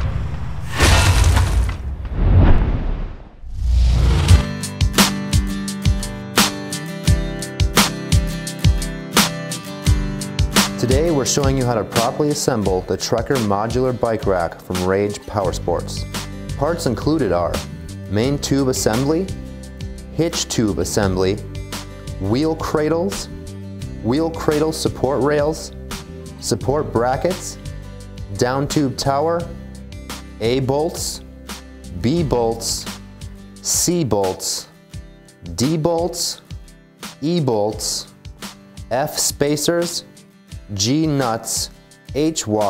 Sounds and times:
Music: 0:04.0 - 0:42.6
Speech: 0:10.8 - 0:19.4, 0:20.2 - 0:21.5, 0:22.2 - 0:23.3, 0:24.0 - 0:25.8, 0:26.4 - 0:27.6, 0:28.3 - 0:29.6, 0:30.4 - 0:31.2, 0:31.9 - 0:32.9, 0:33.6 - 0:34.7, 0:35.5 - 0:36.5, 0:37.2 - 0:38.1, 0:38.9 - 0:40.1, 0:40.7 - 0:42.6.

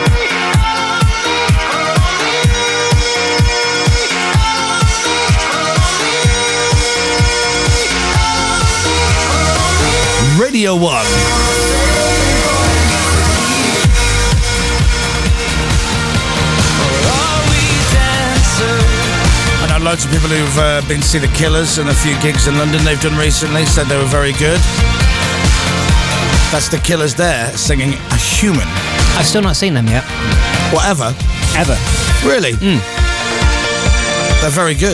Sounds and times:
Electronic dance music: 0:00.0 - 0:34.9.

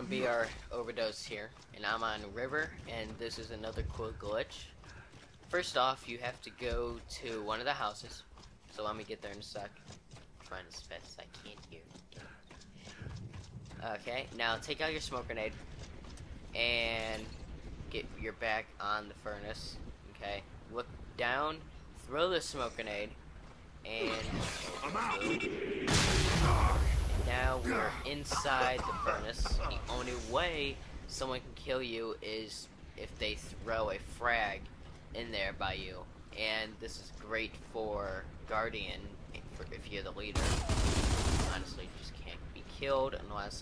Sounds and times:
Speech: 0:00.0 - 0:04.8, 0:05.5 - 0:09.8, 0:10.5 - 0:12.3, 0:13.8 - 0:15.6, 0:16.6 - 0:17.3, 0:17.9 - 0:23.2, 0:23.8 - 0:25.4, 0:26.4 - 0:40.4, 0:41.4 - 0:43.6.

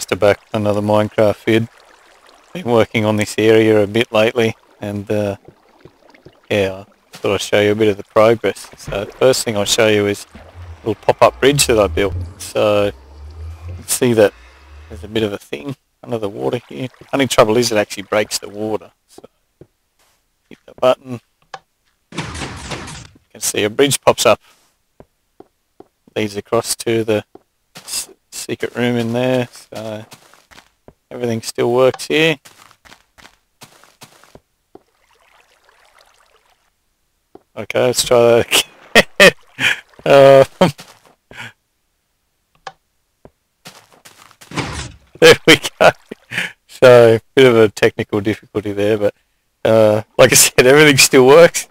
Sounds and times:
Speech: 0:00.0 - 0:01.7, 0:02.6 - 0:05.4, 0:06.5 - 0:13.0, 0:13.7 - 0:19.3, 0:20.5 - 0:21.2, 0:23.3 - 0:24.4, 0:26.1 - 0:30.1, 0:31.1 - 0:32.4, 0:37.6 - 0:39.3, 0:40.0 - 0:40.7, 0:45.2 - 0:51.7.

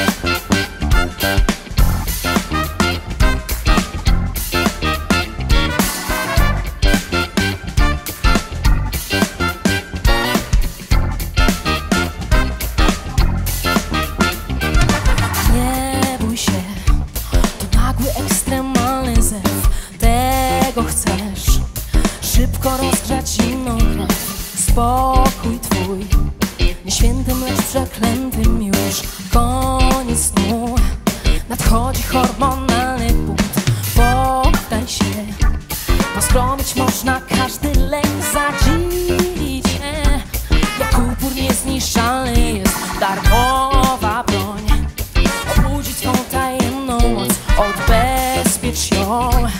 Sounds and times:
Music: 0:00.0 - 0:49.6.

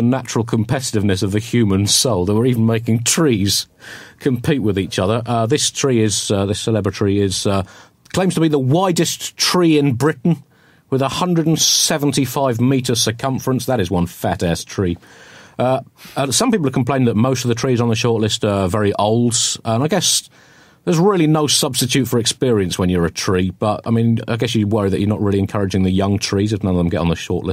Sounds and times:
Speech: 0:00.0 - 0:15.0, 0:15.6 - 0:27.5.

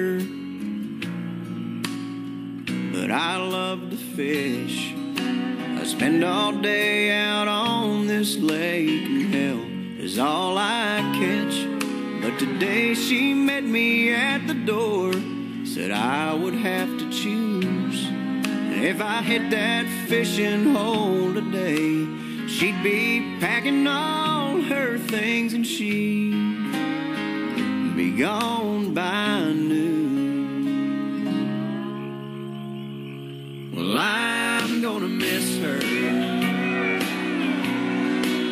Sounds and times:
Christian music: 0:02.7 - 0:38.5.

